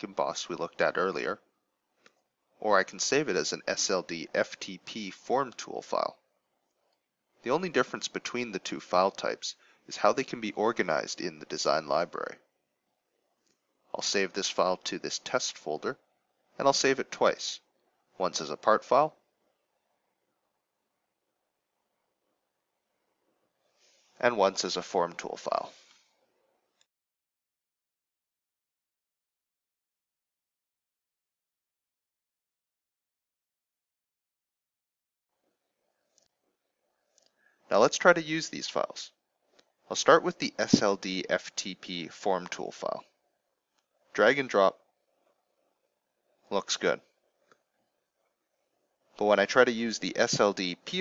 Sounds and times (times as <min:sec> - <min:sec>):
Speech: 0:00.0 - 0:01.4, 0:02.6 - 0:06.2, 0:07.5 - 0:12.4, 0:14.0 - 0:16.0, 0:16.6 - 0:17.6, 0:18.2 - 0:19.1, 0:24.2 - 0:25.8, 0:37.7 - 0:39.1, 0:39.9 - 0:43.0, 0:44.2 - 0:44.8, 0:46.5 - 0:47.0, 0:49.2 - 0:51.0.